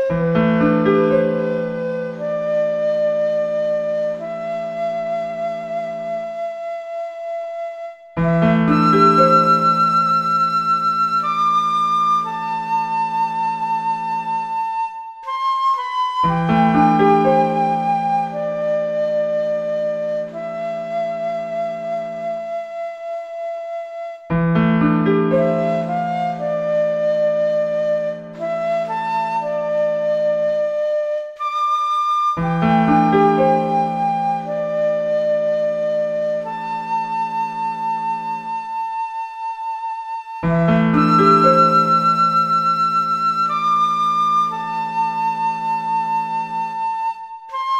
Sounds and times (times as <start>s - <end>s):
Tender music: 0.0s - 6.8s, 8.1s - 22.9s, 24.3s - 47.7s.